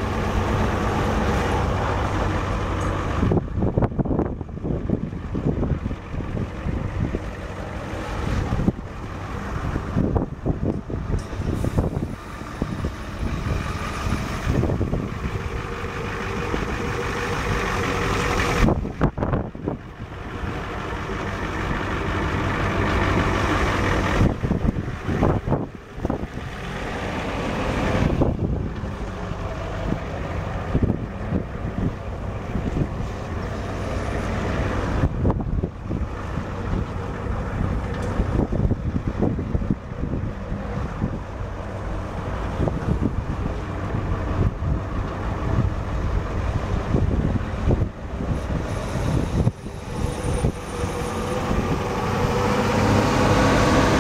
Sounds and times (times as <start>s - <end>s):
Truck: 0.0s - 54.0s.